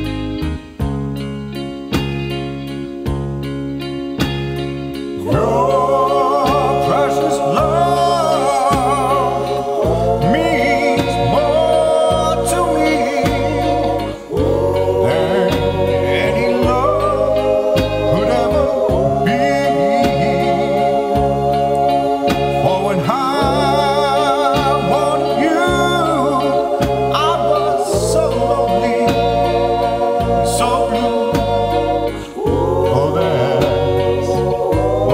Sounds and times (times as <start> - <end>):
Male singing: 5.2 - 20.8, 22.6 - 29.3, 30.4 - 31.4, 32.4 - 35.1
Choir: 5.2 - 35.1.